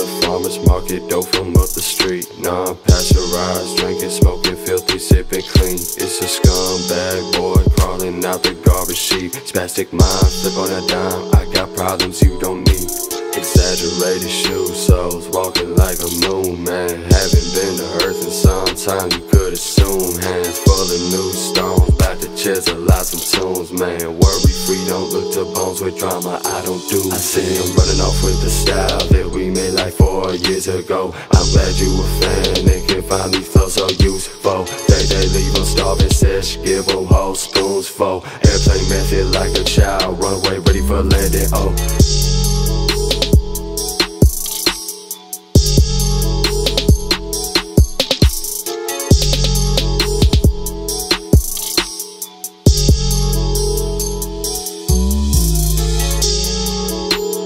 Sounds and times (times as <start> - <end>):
Music: 0.0 - 57.4.